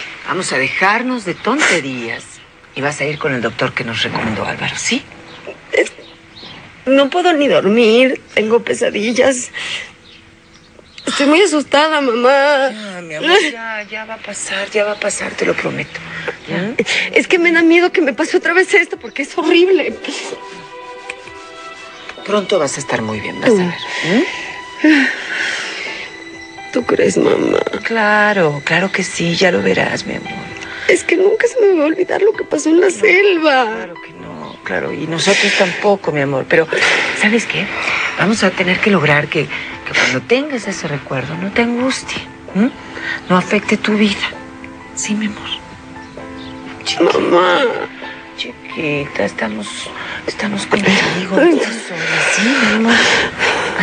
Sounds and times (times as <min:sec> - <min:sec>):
Music: 0:00.0 - 0:53.8.